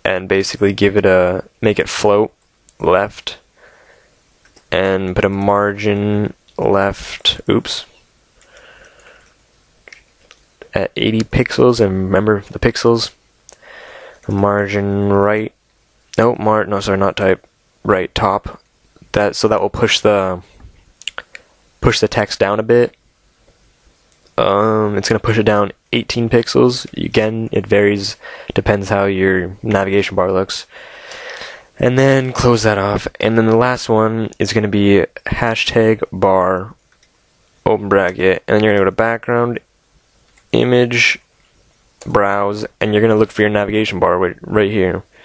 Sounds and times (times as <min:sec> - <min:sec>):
Speech: 0:00.0 - 0:03.5, 0:04.7 - 0:08.0, 0:10.6 - 0:13.2, 0:14.3 - 0:23.0, 0:24.4 - 0:30.7, 0:31.4 - 0:36.8, 0:37.6 - 0:39.7, 0:40.5 - 0:41.2, 0:42.0 - 0:45.2.